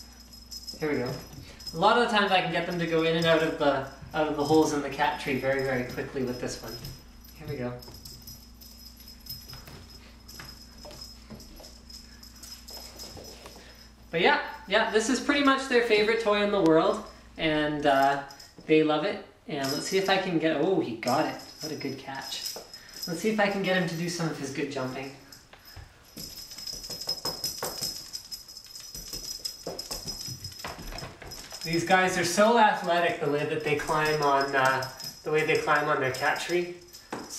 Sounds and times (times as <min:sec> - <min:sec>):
Speech: 0:00.8 - 0:07.9, 0:14.2 - 0:22.5, 0:23.1 - 0:25.2, 0:31.7 - 0:36.8.